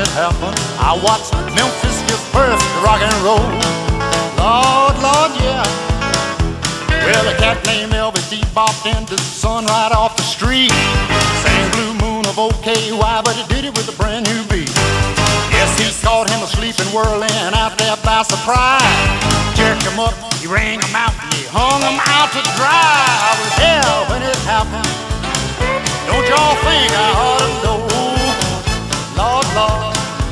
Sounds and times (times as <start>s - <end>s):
Rock and roll: 0.0s - 30.3s.